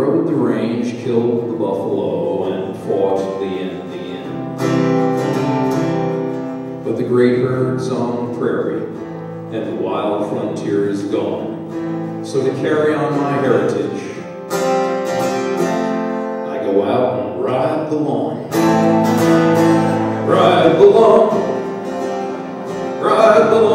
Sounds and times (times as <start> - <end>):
Speech: 0.0 - 4.3, 6.8 - 11.5, 12.2 - 14.2, 16.5 - 18.5, 20.3 - 21.4
Music: 0.0 - 23.7.